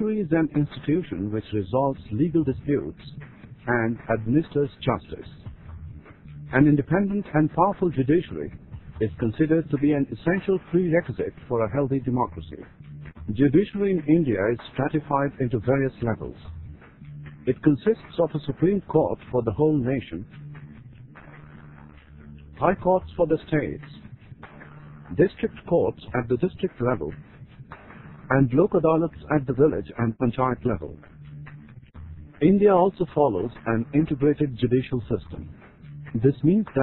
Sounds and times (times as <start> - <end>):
Speech: 0.0 - 5.4, 6.5 - 12.7, 13.3 - 16.5, 17.5 - 20.3, 22.6 - 24.0, 25.1 - 27.2, 28.3 - 31.0, 32.4 - 35.5, 36.2 - 36.8.